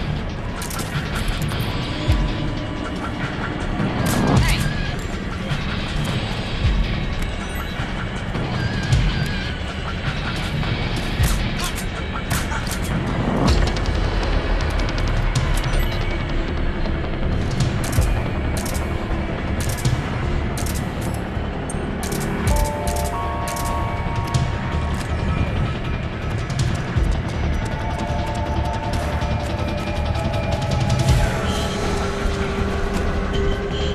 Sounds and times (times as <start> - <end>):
Music: 0.0 - 33.9.